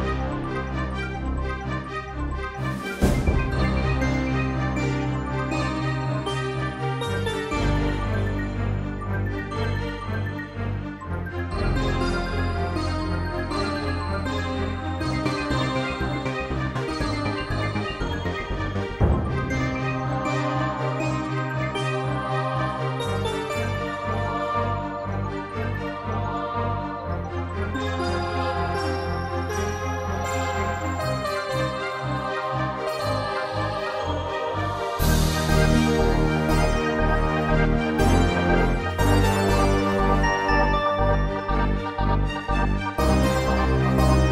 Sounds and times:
Music: 0.0 - 44.3.

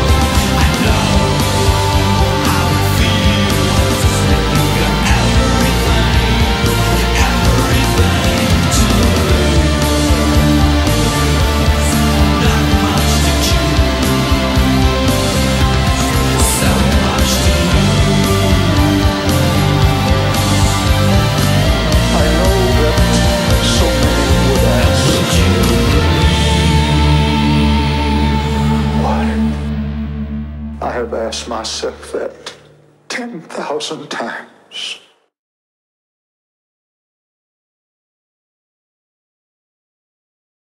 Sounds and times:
Music: 0.0 - 32.9
Speech: 22.0 - 25.8, 28.9 - 29.6, 30.8 - 35.3.

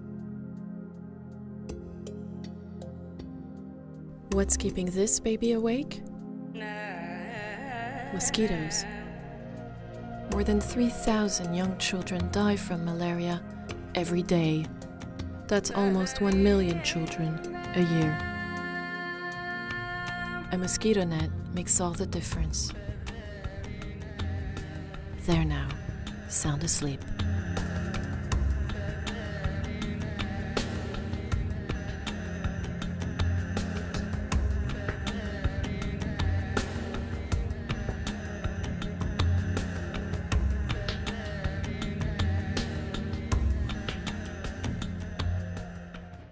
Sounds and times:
Music: 0.0 - 46.3.

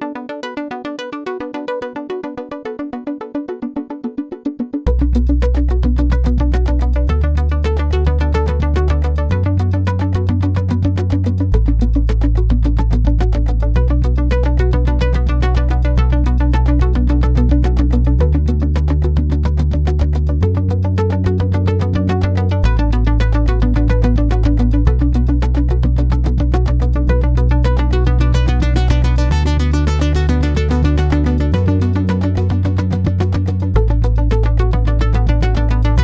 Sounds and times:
Electronic music: 0.0 - 36.0.

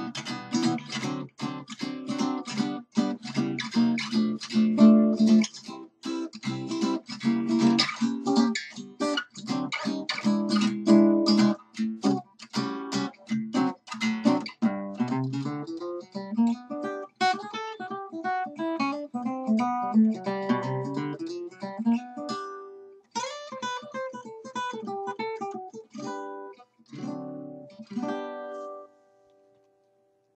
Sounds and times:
Guitar: 0.0 - 30.2.

